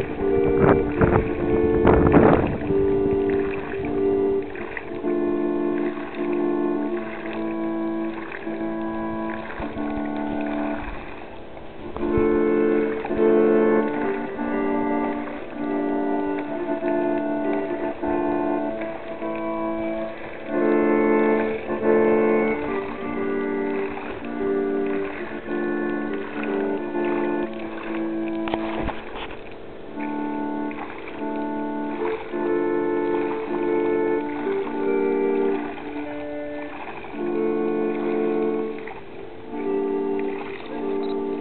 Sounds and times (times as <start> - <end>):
Music: 0.0 - 41.4.